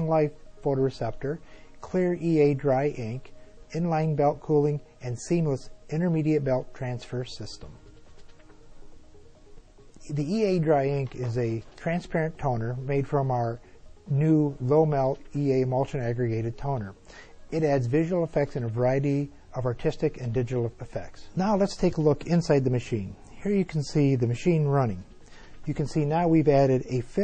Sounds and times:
Speech: 0.0 - 7.8, 10.0 - 27.2
Music: 0.0 - 27.2.

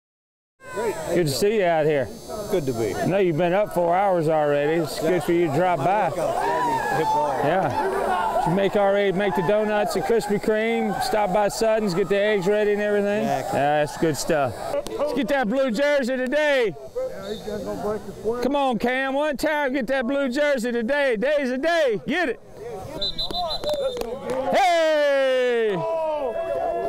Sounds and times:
Shout: 0.6 - 1.2, 6.2 - 11.4, 24.3 - 26.8.

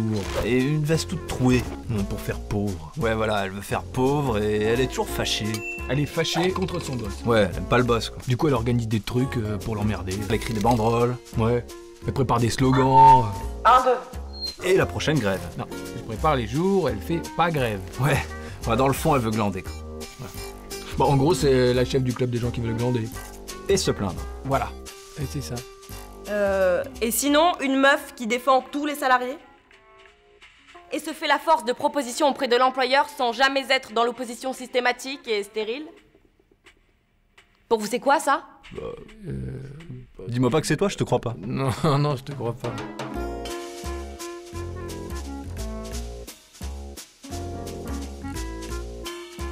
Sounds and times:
Speech: 0.0 - 19.7, 20.9 - 23.1, 23.7 - 25.6, 30.9 - 36.0, 37.7 - 42.8
Music: 0.0 - 49.5.

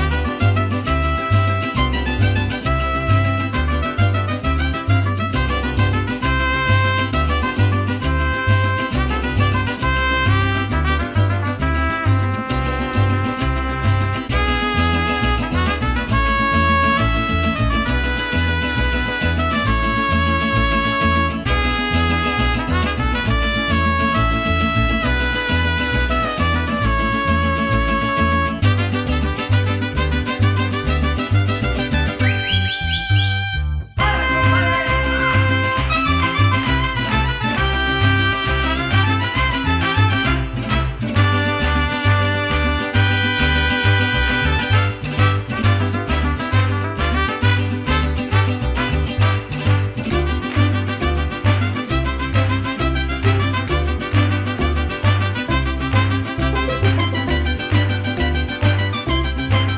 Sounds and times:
Swing music: 0.0 - 59.7.

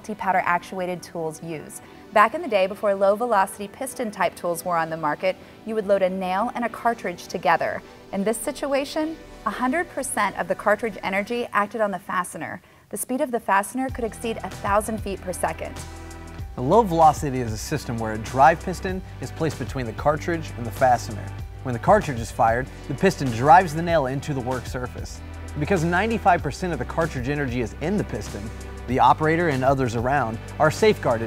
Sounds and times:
Speech: 0.0 - 15.7, 16.6 - 31.2
Music: 0.0 - 31.2.

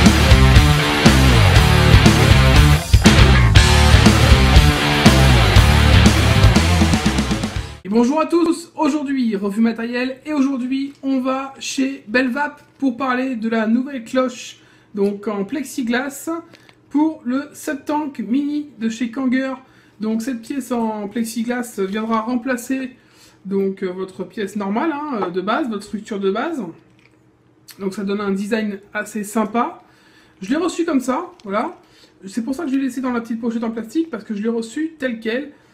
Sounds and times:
Speech: 7.8 - 26.8, 27.7 - 29.8, 30.4 - 35.6.

